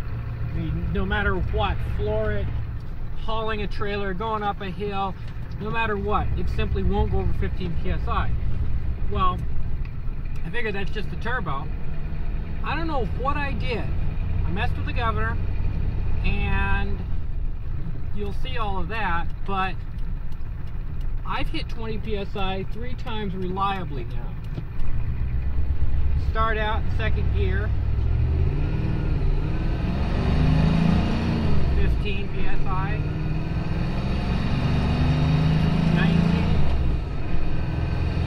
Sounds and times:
Speech: 3.2 - 8.3, 12.6 - 15.4, 16.2 - 17.0, 18.2 - 19.8, 21.2 - 24.4, 26.2 - 27.7, 31.8 - 33.0, 35.9 - 36.5.

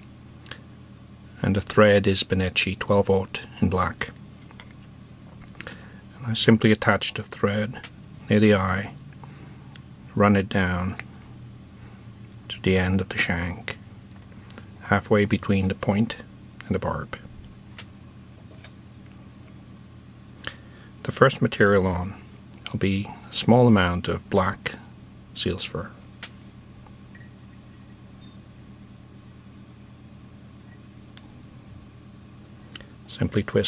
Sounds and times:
Speech: 1.4 - 4.2, 6.2 - 9.0, 10.1 - 11.0, 12.5 - 13.8, 14.8 - 17.3, 21.0 - 26.0, 33.1 - 33.6.

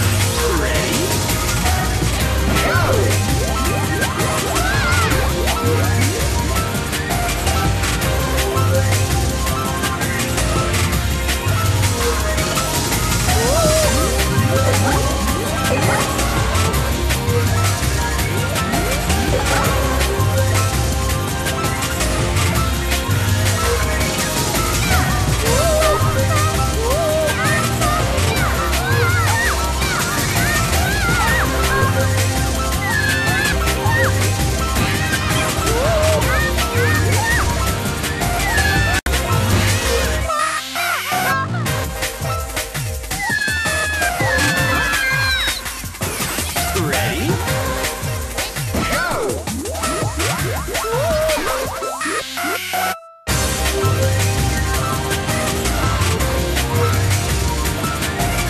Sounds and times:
Music: 0.0 - 58.4.

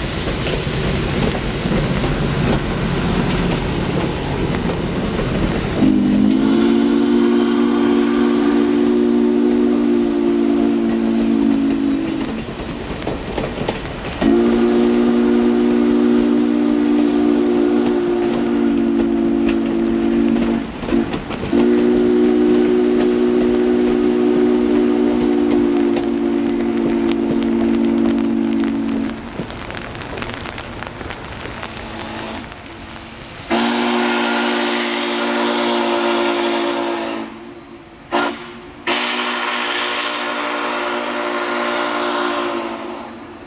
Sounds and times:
Steam whistle: 5.7 - 12.4, 14.2 - 29.2, 33.5 - 43.4.

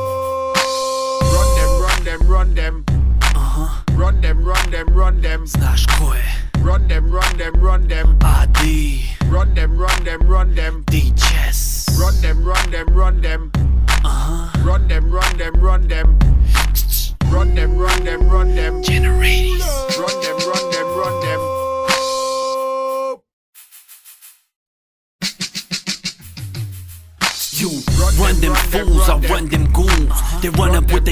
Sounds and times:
Music: 0.0 - 22.7, 25.2 - 31.1.

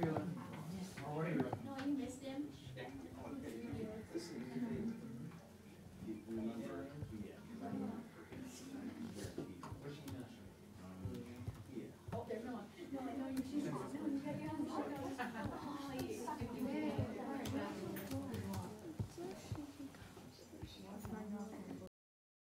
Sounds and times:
Female speech, woman speaking: 0.0 - 1.0, 1.6 - 4.9, 12.1 - 21.9.

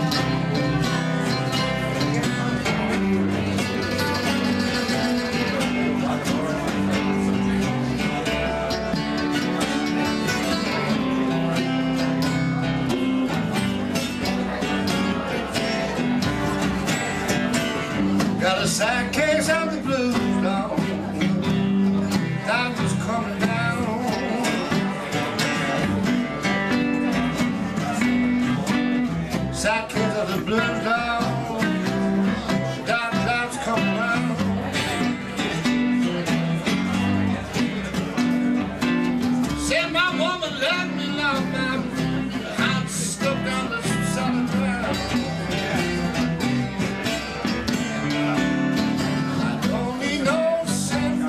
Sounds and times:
Rhythm and blues: 0.0 - 51.2.

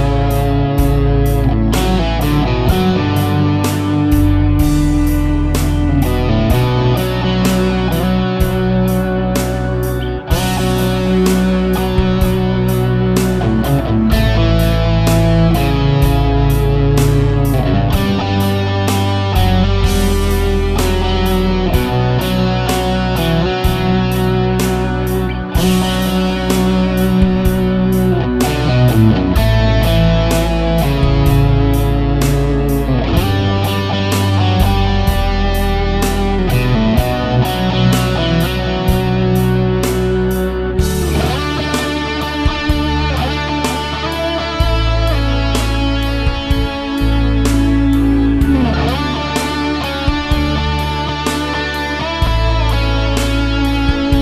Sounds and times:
Music: 0.0 - 54.2.

